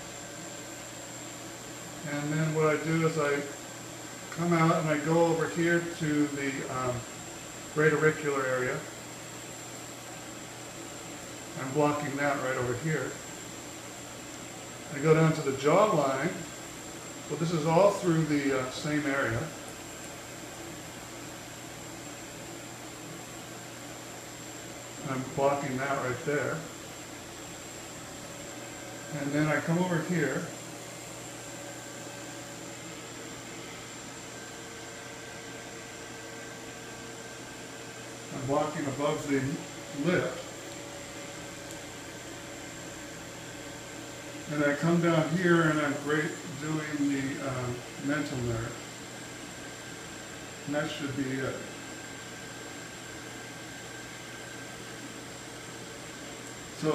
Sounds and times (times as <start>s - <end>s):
Inside, small room: 0.0s - 56.9s
Speech: 2.0s - 3.6s, 4.4s - 7.1s, 7.8s - 8.9s, 11.6s - 13.2s, 14.9s - 16.5s, 17.3s - 19.6s, 25.0s - 26.7s, 29.1s - 30.6s, 38.3s - 40.5s, 44.5s - 48.8s, 50.6s - 51.8s.